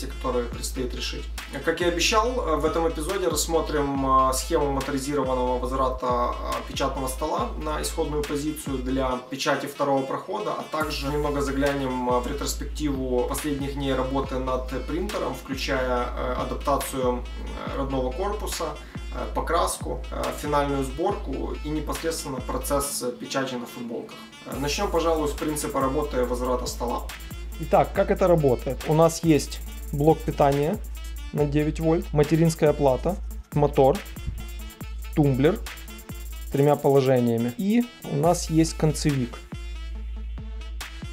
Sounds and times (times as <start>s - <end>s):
Speech: 0.0s - 34.1s, 35.2s - 35.6s, 36.5s - 39.4s
Music: 0.0s - 41.1s.